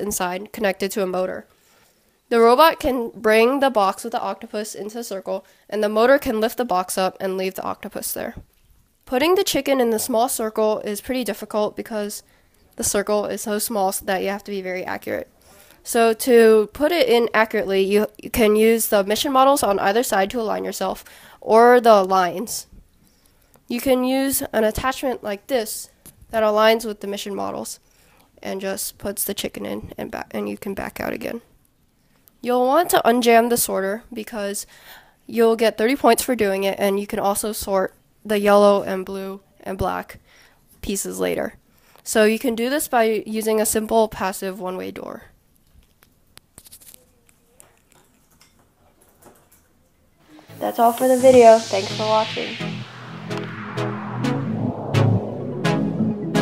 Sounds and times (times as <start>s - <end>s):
Speech: 0.0s - 1.5s, 2.3s - 8.4s, 9.1s - 12.2s, 12.8s - 22.7s, 23.7s - 27.8s, 28.4s - 31.5s, 32.4s - 34.7s, 35.3s - 40.2s, 40.8s - 45.3s, 50.5s - 52.6s
Inside, small room: 0.0s - 56.4s
Music: 50.3s - 56.4s.